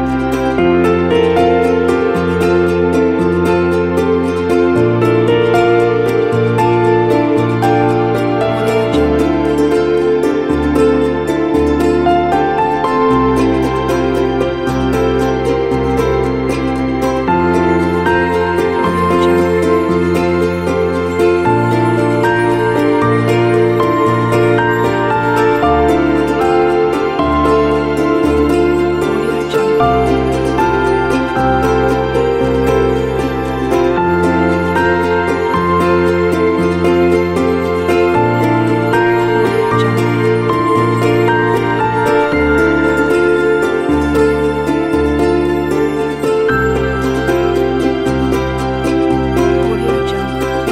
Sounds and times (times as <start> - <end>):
Music: 0.0 - 50.7.